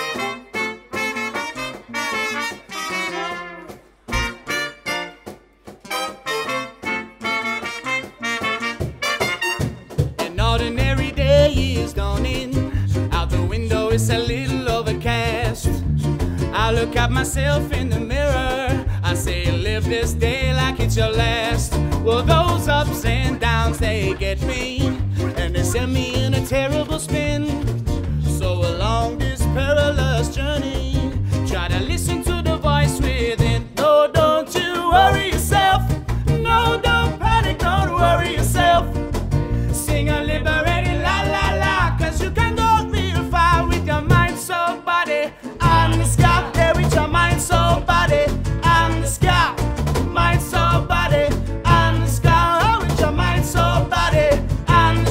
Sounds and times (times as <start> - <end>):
Trombone: 0.0 - 10.3
Trumpet: 0.0 - 11.5, 34.6 - 55.1.